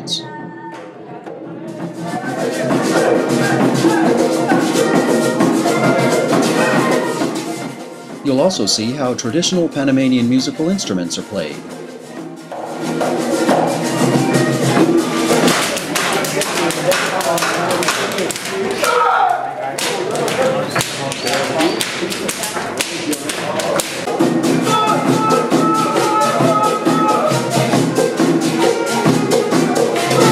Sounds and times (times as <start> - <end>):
Music: 0.0 - 30.3
Speech: 8.2 - 11.7.